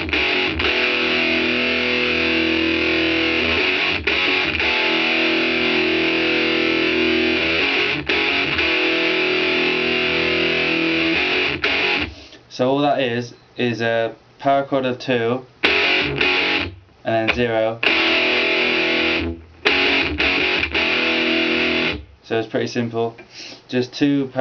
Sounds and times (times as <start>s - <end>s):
Music: 0.0s - 12.2s, 15.6s - 16.8s, 17.8s - 22.1s.